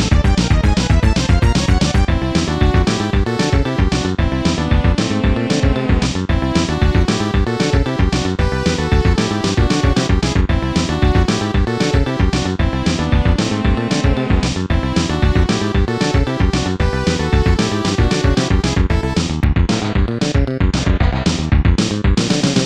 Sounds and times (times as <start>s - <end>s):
Music: 0.0s - 22.6s.